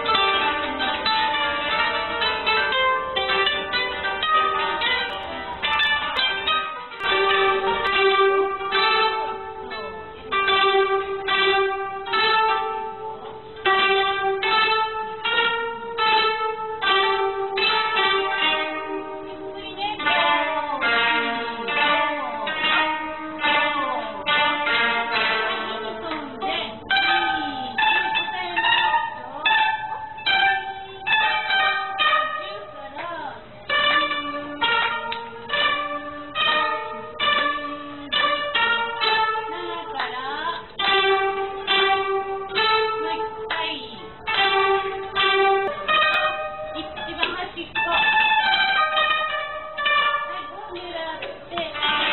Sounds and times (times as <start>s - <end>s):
Plucked string instrument: 0.0s - 52.1s.